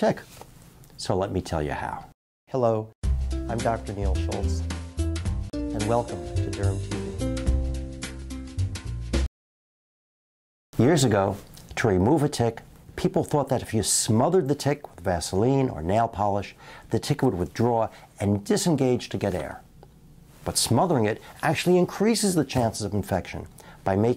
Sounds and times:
Speech: 0:00.0 - 0:00.3, 0:01.0 - 0:02.9, 0:03.5 - 0:04.6, 0:05.7 - 0:07.0, 0:10.8 - 0:19.7, 0:20.4 - 0:24.1.

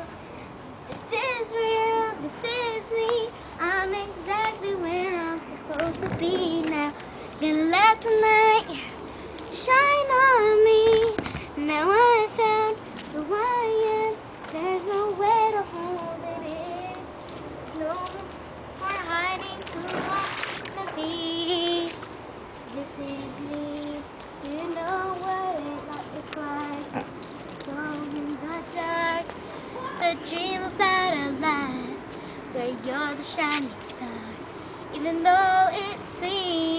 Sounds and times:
Child singing: 0:00.9 - 0:17.1, 0:17.7 - 0:22.0, 0:22.7 - 0:36.7.

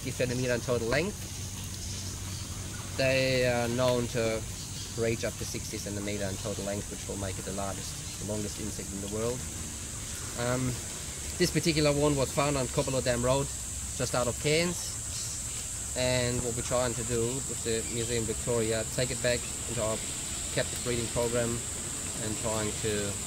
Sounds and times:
Speech: 0:00.0 - 0:01.2, 0:03.0 - 0:04.4, 0:05.0 - 0:09.4, 0:10.4 - 0:10.8, 0:11.4 - 0:15.0, 0:16.0 - 0:20.0, 0:20.6 - 0:21.6, 0:22.2 - 0:23.2.

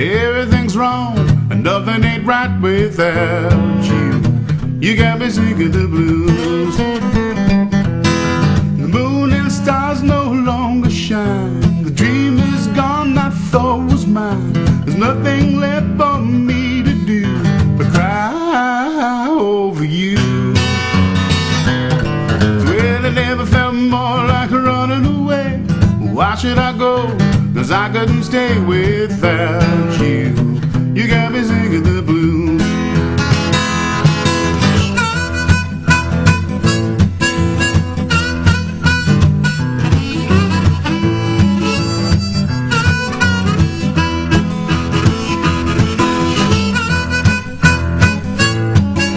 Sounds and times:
Male singing: 0:00.0 - 0:07.2, 0:08.8 - 0:20.8, 0:22.6 - 0:32.9
Music: 0:00.0 - 0:49.1.

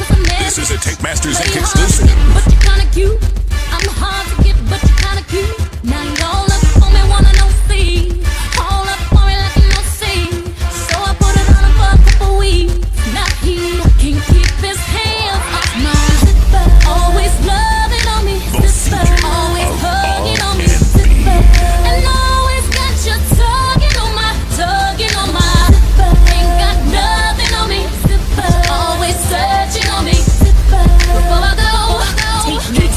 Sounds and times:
Music: 0:00.0 - 0:32.9.

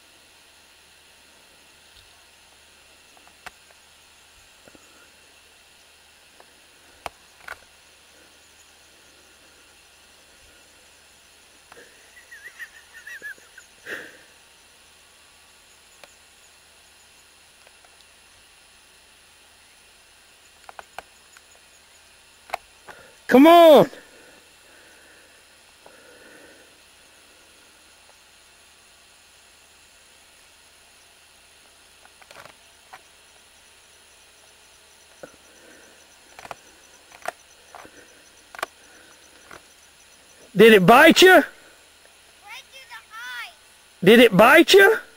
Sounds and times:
Bird: 0:11.8 - 0:13.9.

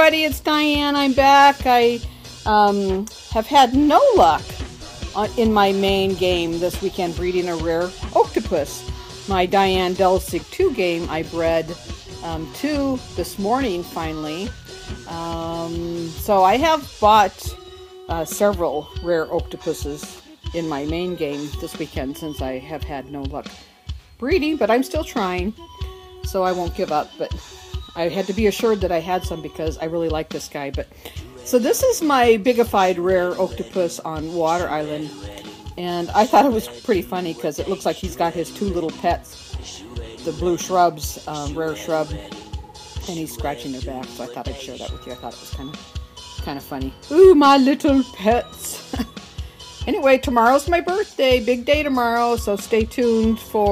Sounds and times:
Speech: 0:00.0 - 0:04.6, 0:05.2 - 0:14.5, 0:15.1 - 0:17.5, 0:18.1 - 0:23.4, 0:24.2 - 0:25.5, 0:26.3 - 0:27.4, 0:28.0 - 0:30.8, 0:31.5 - 0:35.1, 0:35.8 - 0:39.2, 0:40.3 - 0:42.2, 0:43.1 - 0:45.8, 0:46.4 - 0:49.0, 0:49.9 - 0:53.7
Music: 0:00.0 - 0:53.7.

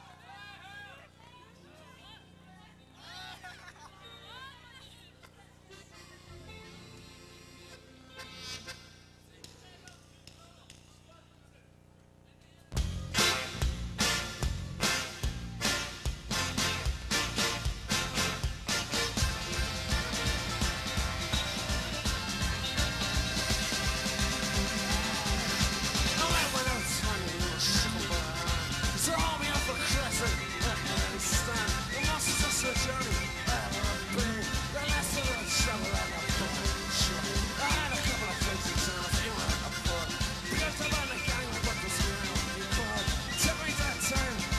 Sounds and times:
Music: 0:05.7 - 0:10.8, 0:12.8 - 0:44.5.

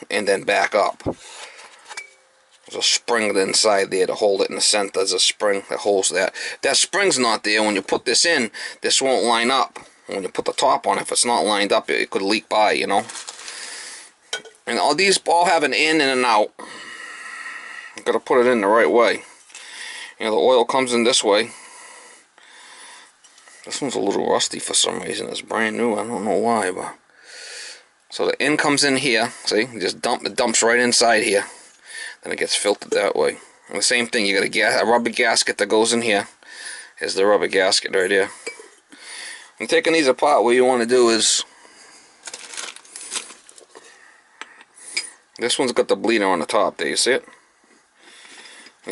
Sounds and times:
Speech: 0:00.0 - 0:01.2, 0:02.7 - 0:13.1, 0:14.7 - 0:16.6, 0:18.0 - 0:19.3, 0:20.2 - 0:21.6, 0:23.7 - 0:27.0, 0:28.1 - 0:31.6, 0:32.2 - 0:36.4, 0:37.0 - 0:38.4, 0:39.6 - 0:41.5, 0:45.4 - 0:47.3.

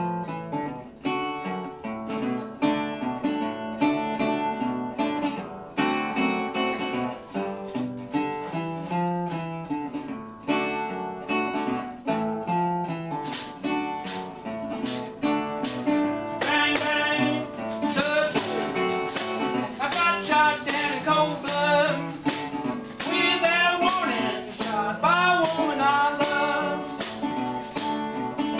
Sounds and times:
Guitar: 0:00.0 - 0:28.5.

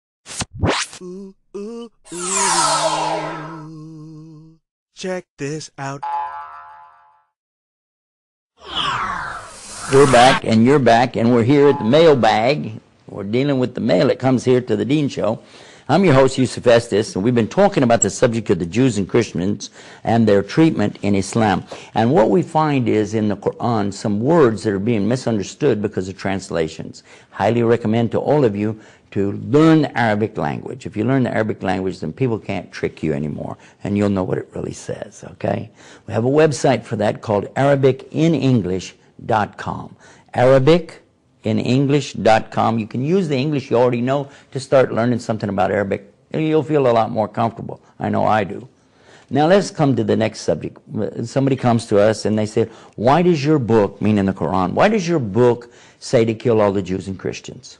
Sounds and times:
Speech: 0:05.0 - 0:06.1, 0:09.9 - 0:48.7, 0:49.3 - 0:57.7.

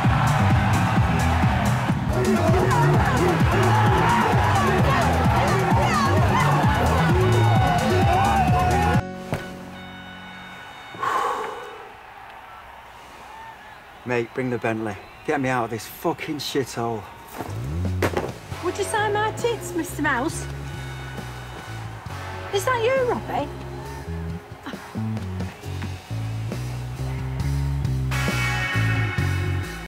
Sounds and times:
Music: 0:00.0 - 0:11.0, 0:17.5 - 0:29.8.

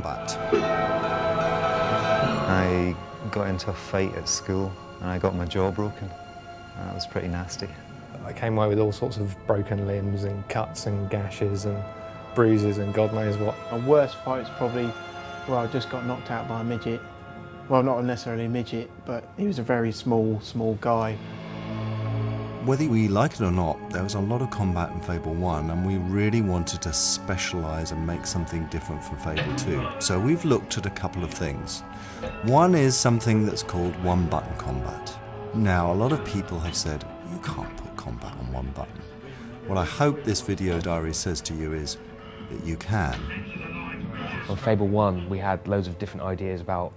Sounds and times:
Music: 0:00.0 - 0:46.9
Speech: 0:02.5 - 0:06.1, 0:06.8 - 0:11.8, 0:12.4 - 0:17.0, 0:17.7 - 0:21.2, 0:22.6 - 0:39.1, 0:39.7 - 0:46.9.

